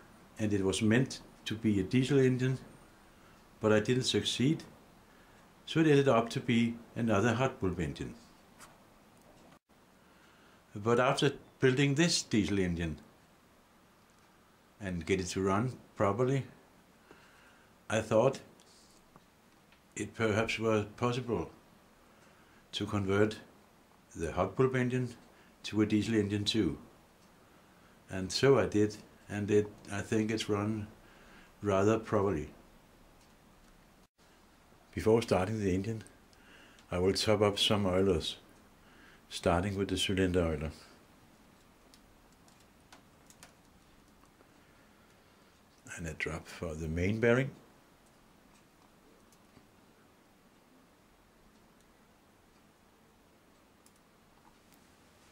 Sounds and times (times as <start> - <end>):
Speech: 0.4 - 2.7, 3.6 - 4.7, 5.6 - 8.2, 10.7 - 13.1, 14.8 - 16.6, 17.9 - 18.5, 20.0 - 21.6, 22.7 - 23.5, 24.1 - 26.9, 28.1 - 31.0, 31.6 - 32.6, 34.9 - 36.2, 36.9 - 38.4, 39.3 - 41.0, 45.9 - 47.6.